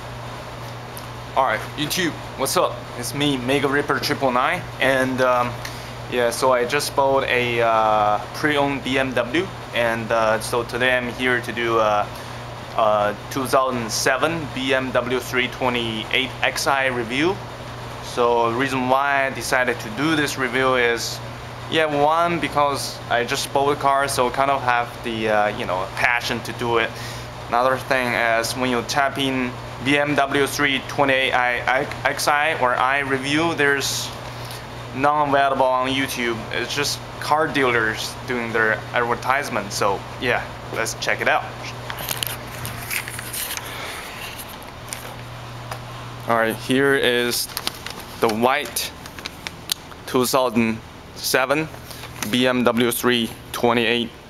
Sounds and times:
Speech: 1.4 - 12.1, 12.8 - 17.4, 18.0 - 34.2, 35.0 - 41.8, 46.3 - 47.5, 48.2 - 49.0, 50.1 - 54.2.

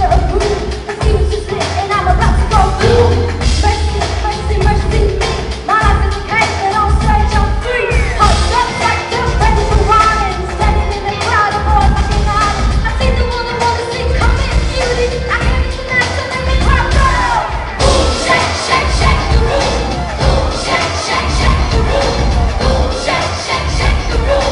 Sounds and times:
Music: 0.0 - 24.5.

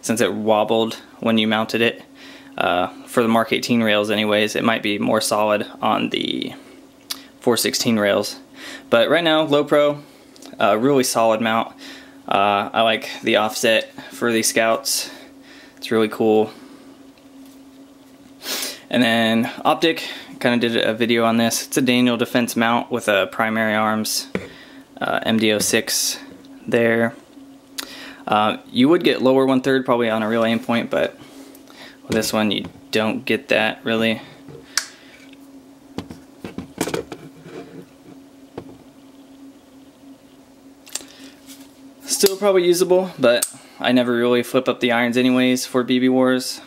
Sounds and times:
Speech: 0.0 - 2.0, 2.6 - 6.6, 7.4 - 11.7, 12.3 - 15.2, 15.8 - 16.6, 18.9 - 24.4, 25.0 - 27.2, 28.3 - 31.2, 32.1 - 34.3, 42.1 - 46.6.

